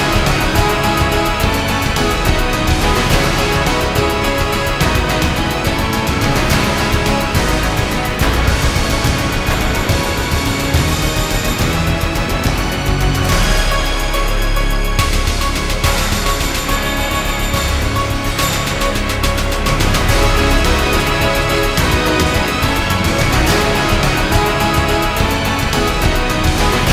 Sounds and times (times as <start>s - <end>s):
Music: 0.0s - 26.9s.